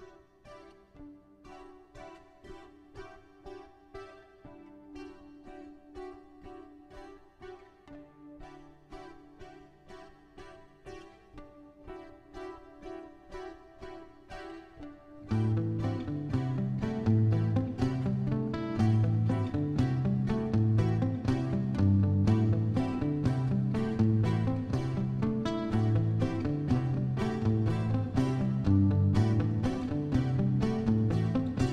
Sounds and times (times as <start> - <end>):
Music: 0.0 - 31.7.